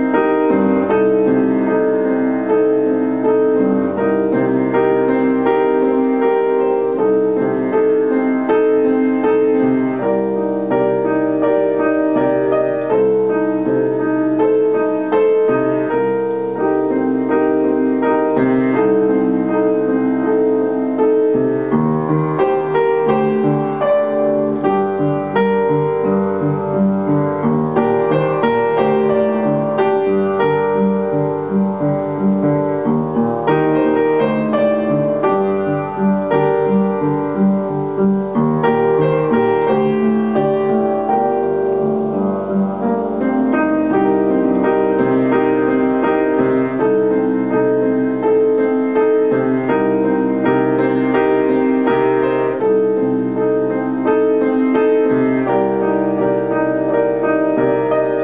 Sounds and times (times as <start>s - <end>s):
Piano: 0.0s - 58.2s.